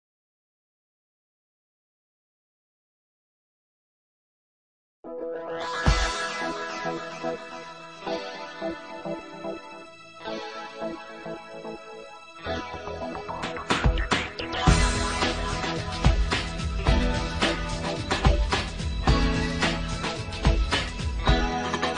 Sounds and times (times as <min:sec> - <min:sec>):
Music: 0:05.0 - 0:21.9.